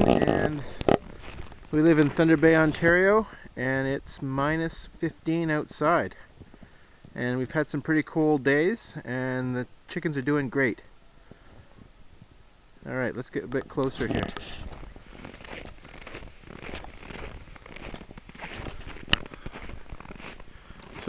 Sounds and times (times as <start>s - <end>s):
Speech: 0.0s - 0.8s, 1.8s - 6.3s, 7.2s - 10.9s, 12.8s - 14.7s.